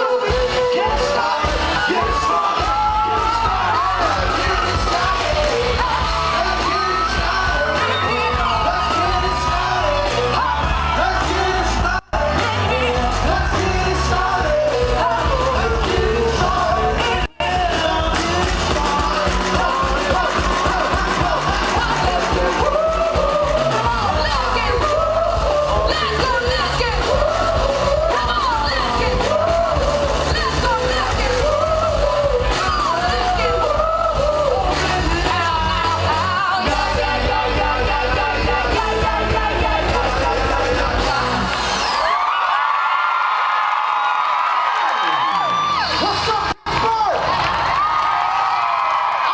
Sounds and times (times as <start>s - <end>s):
Music: 0.0s - 42.4s
Singing: 0.0s - 42.4s.